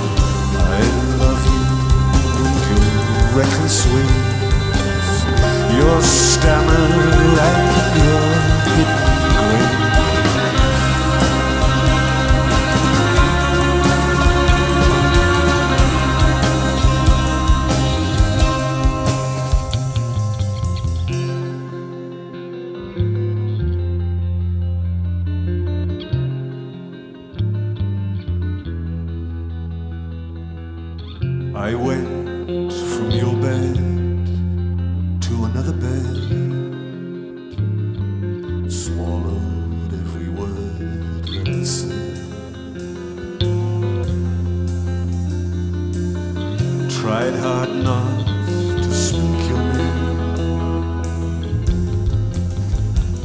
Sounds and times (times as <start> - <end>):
Singing: 0.0 - 18.7, 31.6 - 34.4, 46.9 - 50.9
Music: 0.0 - 53.2.